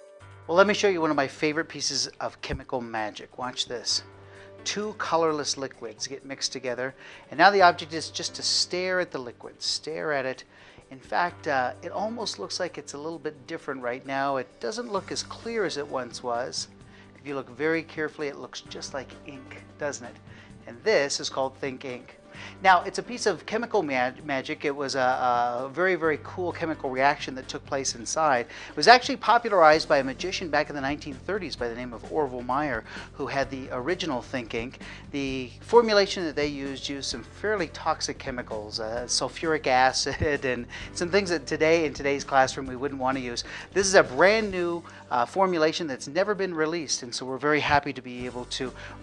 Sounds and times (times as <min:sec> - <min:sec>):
Music: 0:00.0 - 0:49.0
Speech: 0:00.5 - 0:49.0.